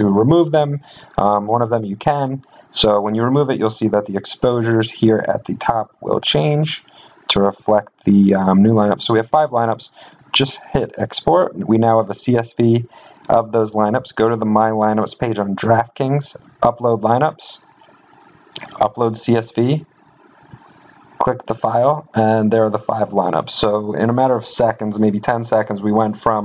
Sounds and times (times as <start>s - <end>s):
Speech: 0.0s - 17.6s, 18.6s - 19.9s, 21.2s - 26.4s.